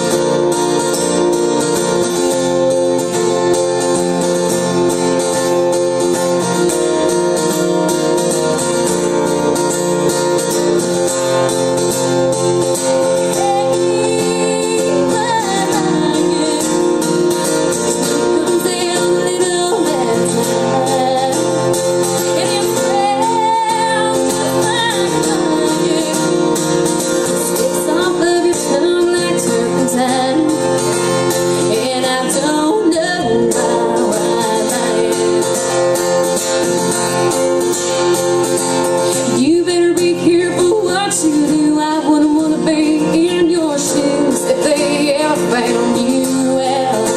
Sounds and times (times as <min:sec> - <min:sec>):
Strum: 0:00.0 - 0:47.1.